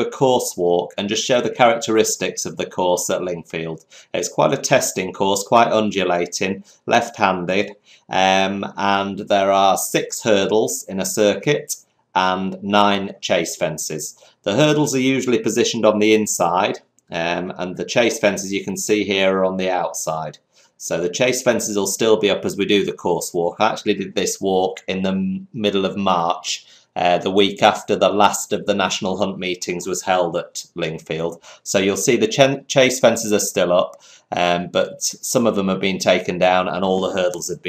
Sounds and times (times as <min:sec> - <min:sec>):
Speech: 0:00.0 - 0:37.6.